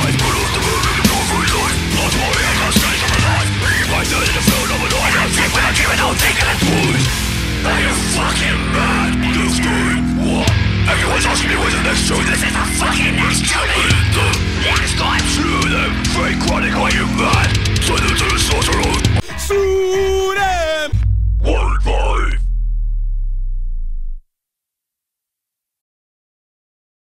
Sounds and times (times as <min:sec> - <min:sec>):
Music: 0:00.0 - 0:21.2.